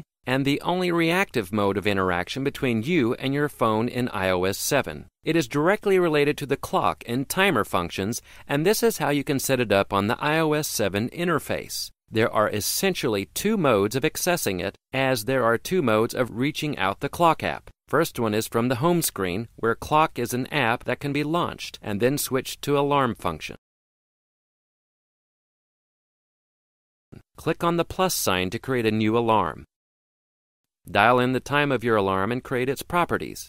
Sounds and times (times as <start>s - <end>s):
Speech: 0.0s - 23.6s, 27.2s - 29.7s, 30.9s - 33.4s.